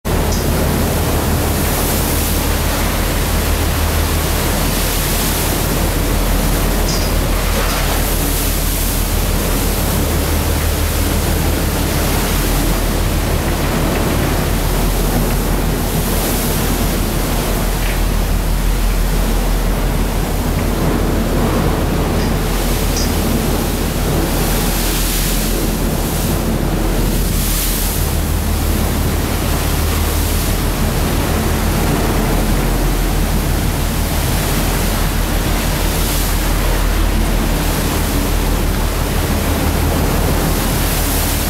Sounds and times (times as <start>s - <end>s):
Outside, rural or natural: 0.0s - 41.4s
Pink noise: 0.1s - 41.4s.